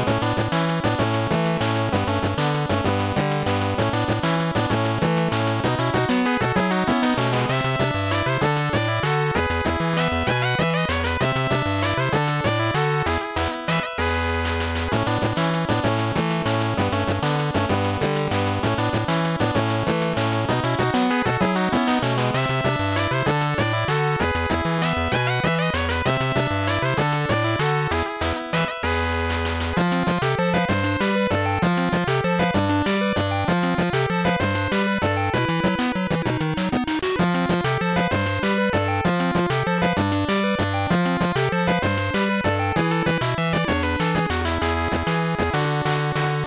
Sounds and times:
Video game music: 0:00.0 - 0:46.4.

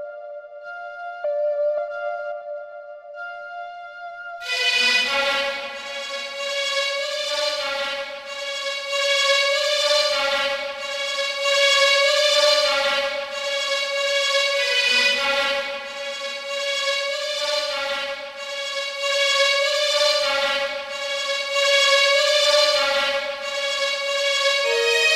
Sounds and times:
Background music: 0:00.0 - 0:25.1.

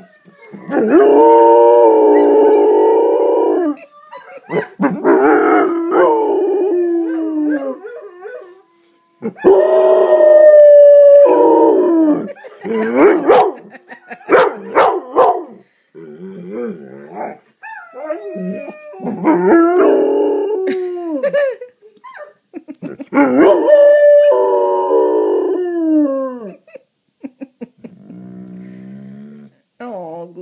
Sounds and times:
Growling: 0:16.0 - 0:17.4, 0:27.8 - 0:29.6.

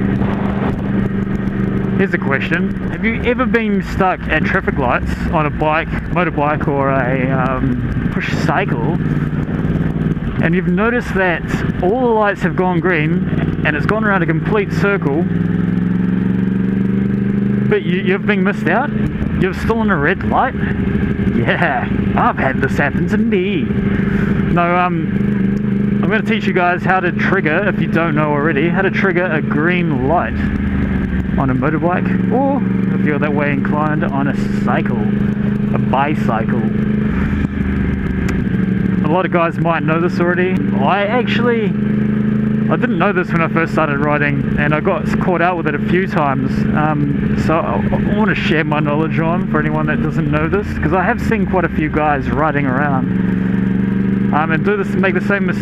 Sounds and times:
Motorcycle: 0:00.0 - 0:55.6
Speech: 0:02.0 - 0:09.0, 0:10.4 - 0:15.3, 0:17.7 - 0:20.7, 0:21.3 - 0:23.8, 0:24.5 - 0:25.1, 0:26.0 - 0:30.5, 0:31.4 - 0:36.8, 0:39.0 - 0:41.8, 0:42.7 - 0:53.1, 0:54.3 - 0:55.6.

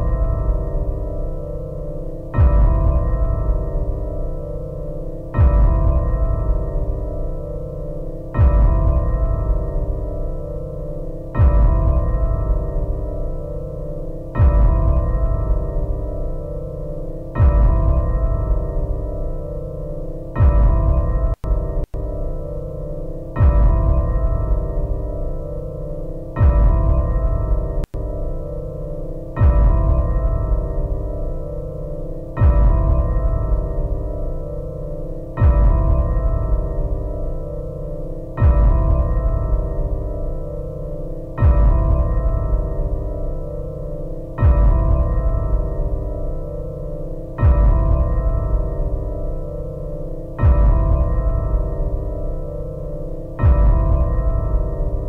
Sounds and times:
Background music: 0:00.0 - 0:55.0.

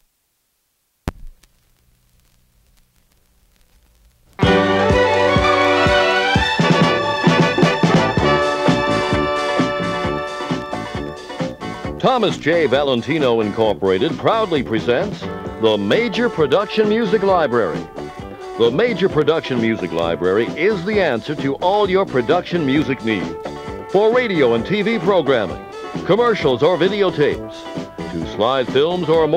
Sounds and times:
Music: 0:04.4 - 0:29.3
Speech: 0:12.0 - 0:17.9, 0:18.6 - 0:29.3.

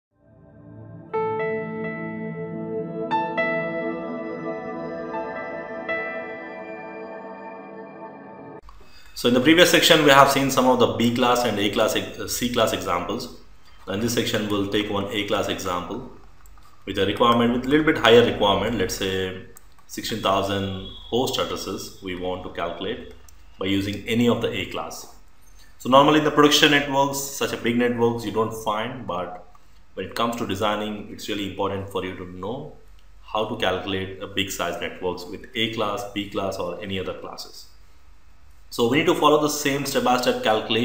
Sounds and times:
New-age music: 0:00.1 - 0:08.7.

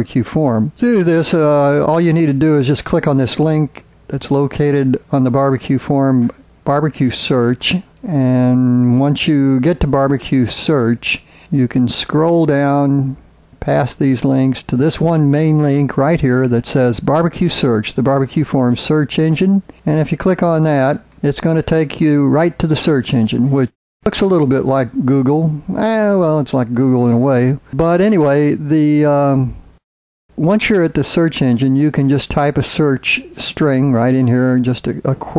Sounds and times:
Speech: 0:00.0 - 0:29.6, 0:30.4 - 0:35.3.

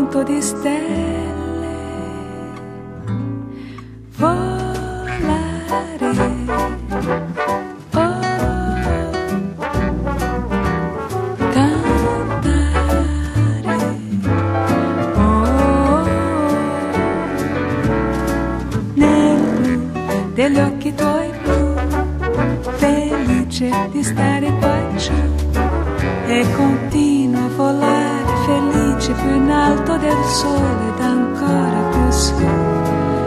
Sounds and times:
Tender music: 0:00.0 - 0:33.2.

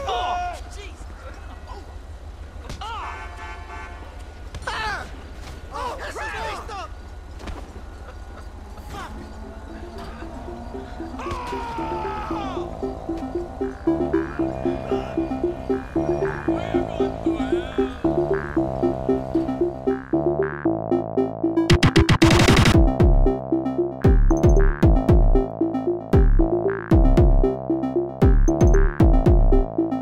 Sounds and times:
Outside, urban or manmade: 0:00.0 - 0:30.0
Music: 0:09.5 - 0:30.0.

